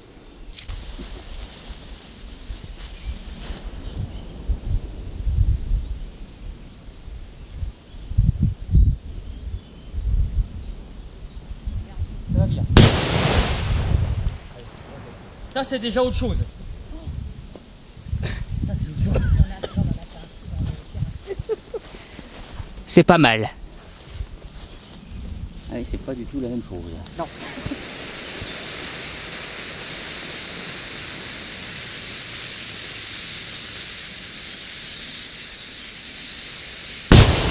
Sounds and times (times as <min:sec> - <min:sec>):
Speech: 0:22.9 - 0:23.6, 0:25.7 - 0:27.3.